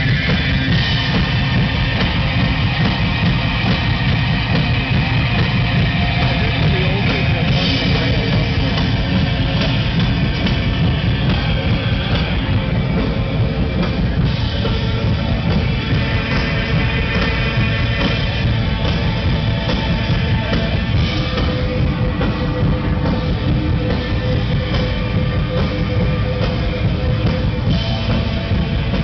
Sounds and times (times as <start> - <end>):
Drum: 0.0 - 29.0
Drum kit: 0.0 - 29.0
Rock music: 0.0 - 29.0.